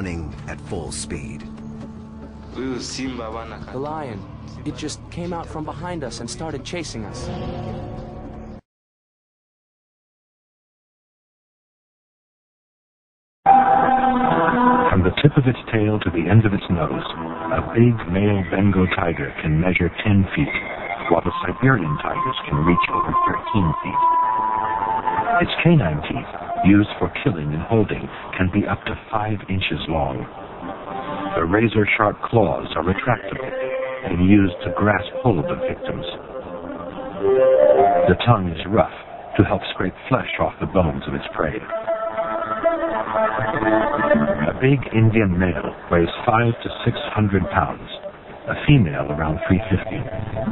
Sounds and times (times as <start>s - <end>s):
Speech: 0.0s - 1.5s, 2.6s - 7.3s, 14.9s - 24.0s, 25.4s - 30.3s, 31.3s - 36.2s, 38.1s - 41.7s, 44.2s - 50.5s
Music: 0.0s - 8.6s, 13.5s - 19.0s, 20.5s - 27.1s, 30.3s - 38.6s, 41.2s - 45.1s, 50.1s - 50.5s.